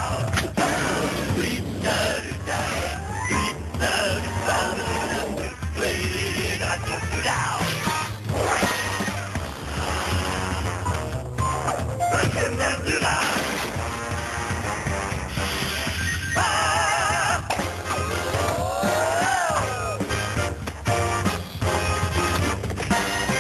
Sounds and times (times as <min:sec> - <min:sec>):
Music: 0:00.0 - 0:23.4
Speech: 0:03.8 - 0:07.9, 0:12.1 - 0:13.4.